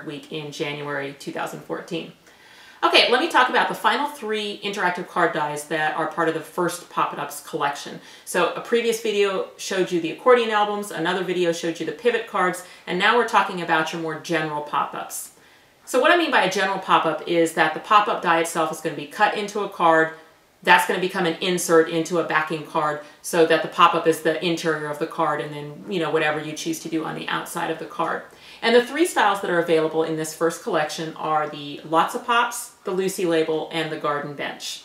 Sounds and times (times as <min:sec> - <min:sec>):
Speech: 0:00.0 - 0:02.2, 0:02.8 - 0:34.8.